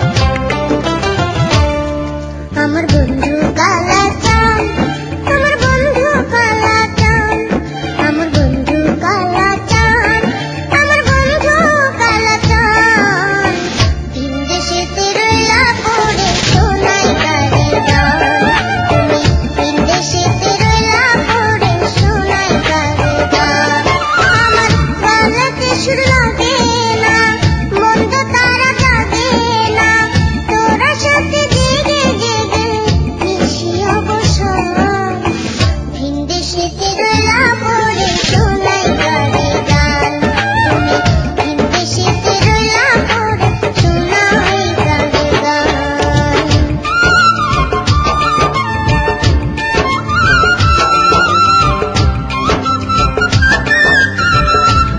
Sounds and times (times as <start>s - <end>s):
Music: 0.0s - 54.9s.